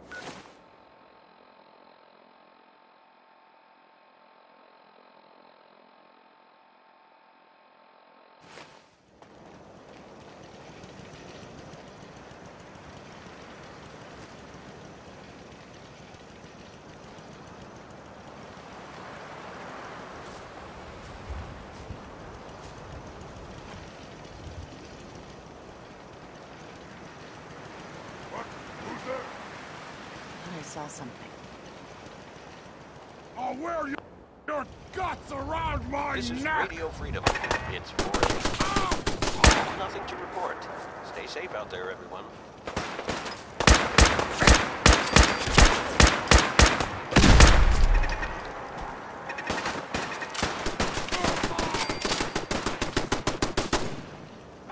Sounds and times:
Speech: 0:33.4 - 0:42.4.

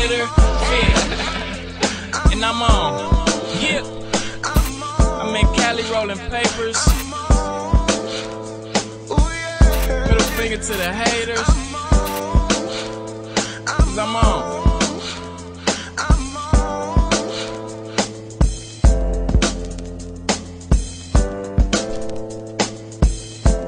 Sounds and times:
Hip hop music: 0:04.6 - 0:04.9, 0:06.9 - 0:07.2.

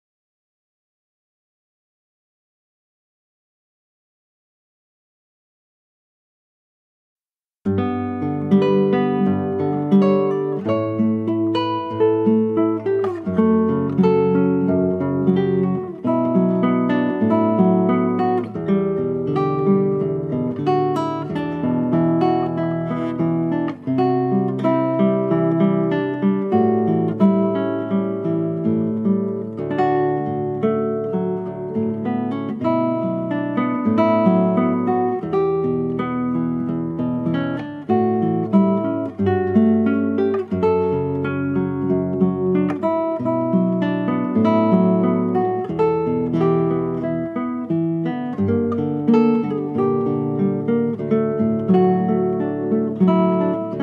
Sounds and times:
Acoustic guitar: 0:07.7 - 0:53.8.

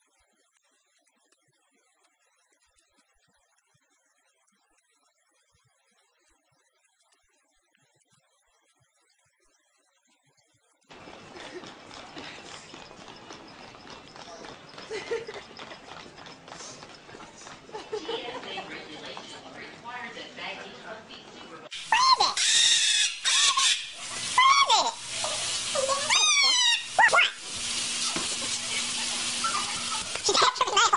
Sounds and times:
Speech: 0:18.0 - 0:22.4.

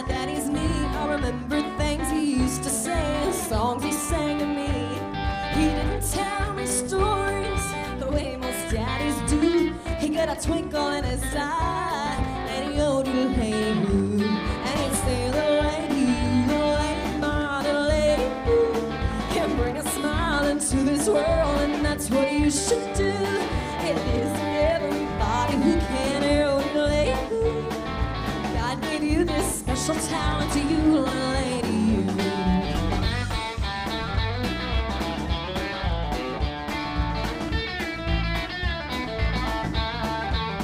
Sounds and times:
Music: 0:00.0 - 0:40.6.

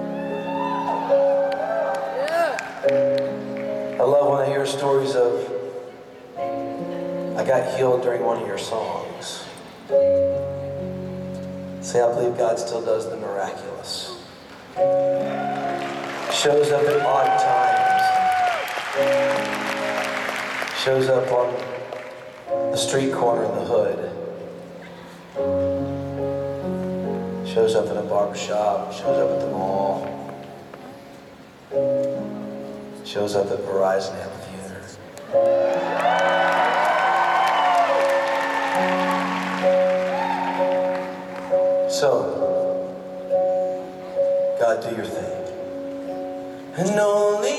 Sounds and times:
Music: 0:00.0 - 0:47.5
Speech: 0:11.8 - 0:14.3, 0:27.5 - 0:30.2, 0:33.1 - 0:35.0, 0:44.6 - 0:45.5.

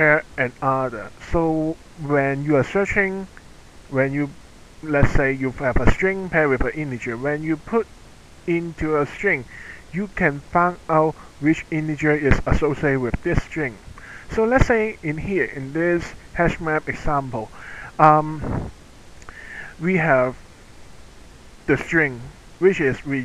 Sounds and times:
Narration, monologue: 0:00.0 - 0:23.2.

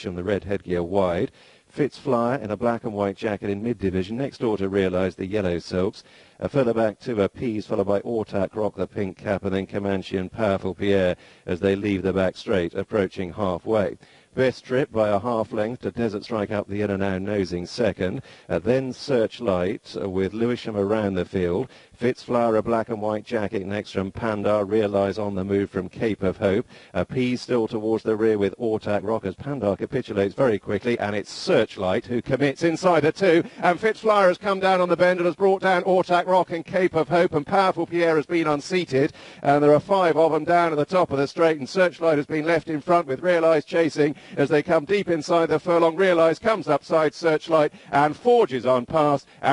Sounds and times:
Speech: 0:00.0 - 0:49.5.

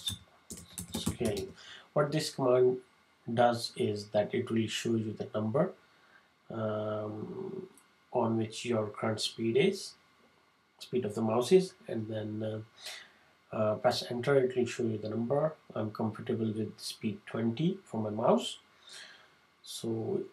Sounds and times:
Speech: 0:00.0 - 0:05.8, 0:06.5 - 0:10.0, 0:10.8 - 0:18.6, 0:19.6 - 0:20.3.

